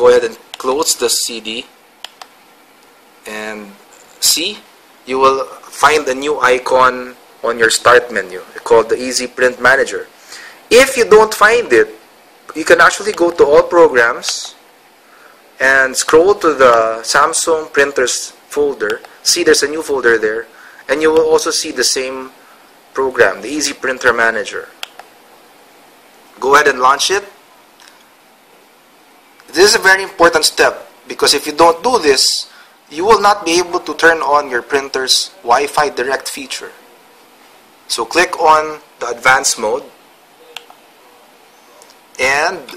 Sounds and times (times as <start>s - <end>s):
Speech: 0.0s - 1.7s, 3.2s - 10.1s, 10.7s - 14.6s, 15.6s - 22.4s, 23.0s - 24.8s, 26.4s - 27.4s, 29.5s - 36.8s, 37.9s - 40.0s, 42.2s - 42.7s.